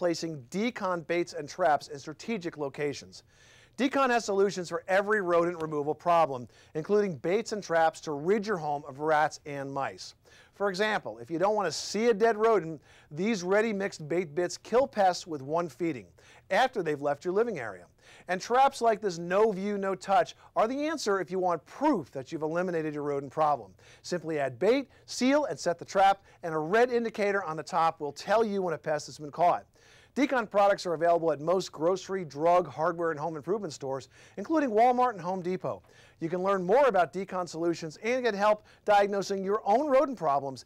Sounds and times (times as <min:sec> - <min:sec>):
Speech: 0:00.0 - 0:03.2, 0:03.8 - 0:40.6.